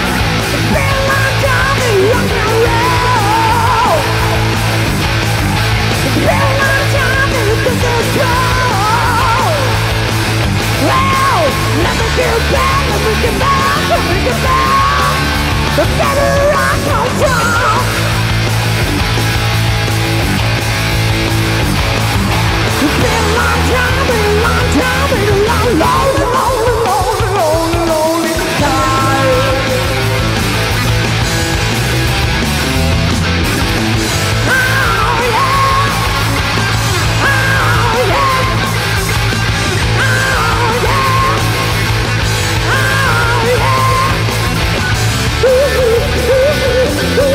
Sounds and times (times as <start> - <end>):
Rock and roll: 0.0 - 47.3.